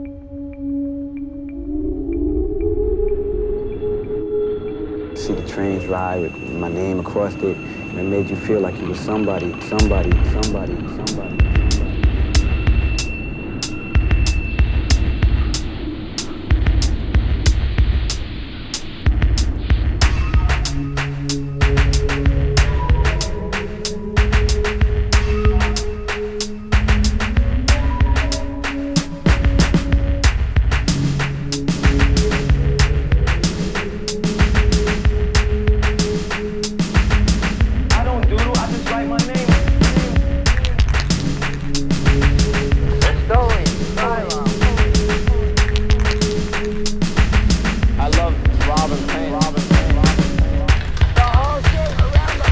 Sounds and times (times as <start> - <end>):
Music: 0.0 - 52.5.